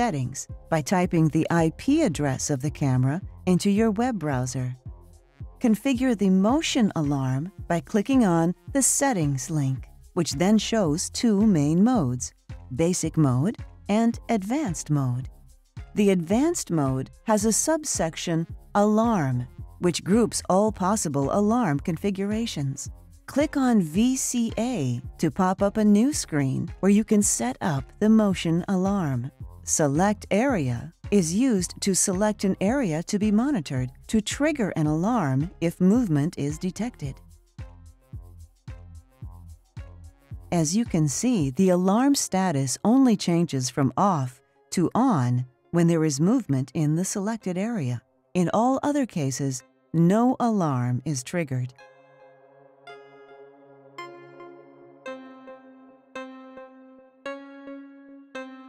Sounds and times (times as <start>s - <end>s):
Speech: 0.0s - 4.8s, 5.6s - 15.3s, 16.0s - 37.2s, 40.5s - 51.7s
Music: 0.0s - 58.6s.